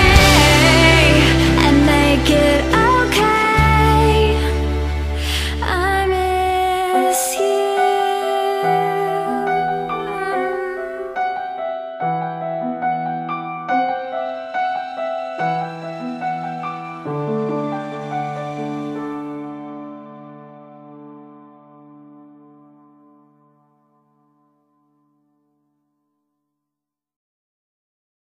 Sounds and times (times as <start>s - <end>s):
Keyboard (musical): 0.0s - 25.0s.